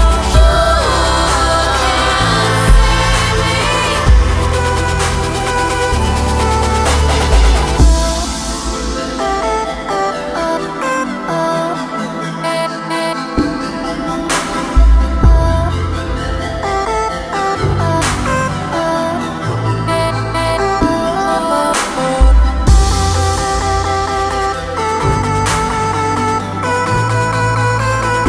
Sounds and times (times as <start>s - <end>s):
Music: 0.0s - 28.2s.